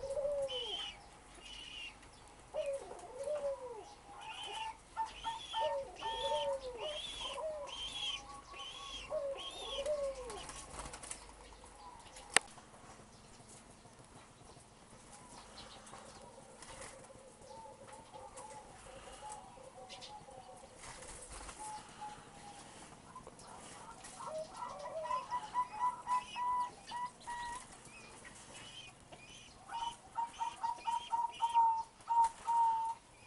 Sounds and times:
Pigeon, dove: 0.0 - 33.2.

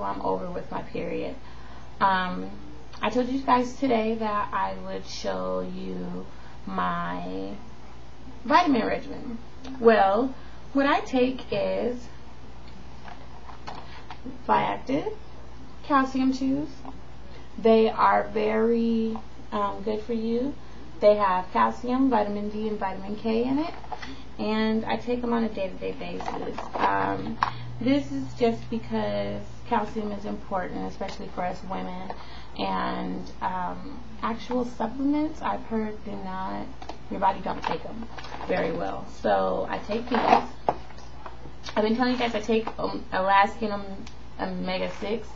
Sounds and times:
Speech: 0.0 - 1.4, 2.0 - 7.6, 8.4 - 12.2, 14.2 - 15.2, 15.8 - 16.8, 17.6 - 23.8, 24.4 - 40.5, 41.7 - 45.3.

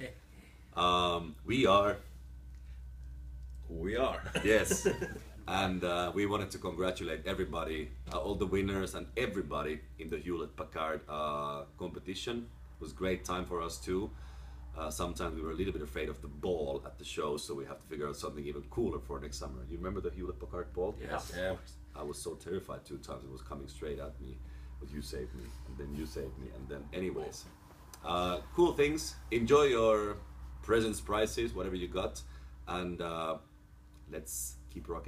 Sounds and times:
Speech: 0.8 - 2.0, 3.7 - 4.8, 5.5 - 14.1, 14.8 - 33.4, 34.1 - 35.0.

